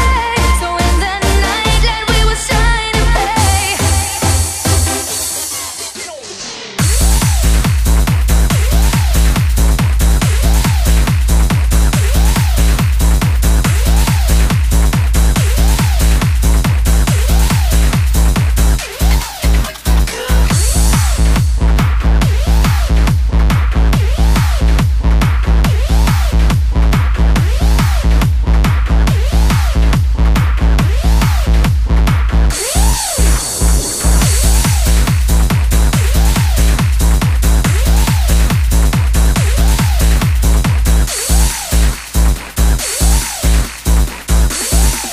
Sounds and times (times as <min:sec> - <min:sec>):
Trance music: 0:00.0 - 0:45.1.